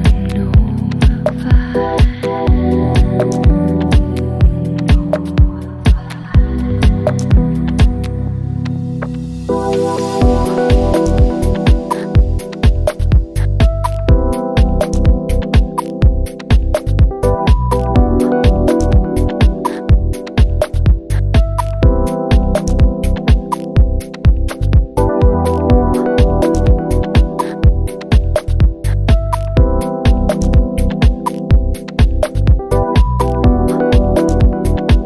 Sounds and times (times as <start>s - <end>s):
Music: 0.0s - 35.0s.